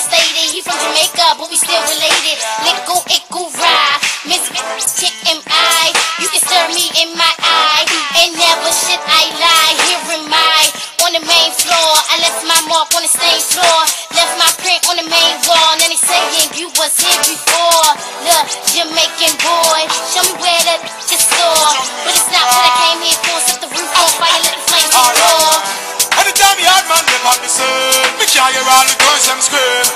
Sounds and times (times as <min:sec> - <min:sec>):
Music: 0:00.0 - 0:29.9.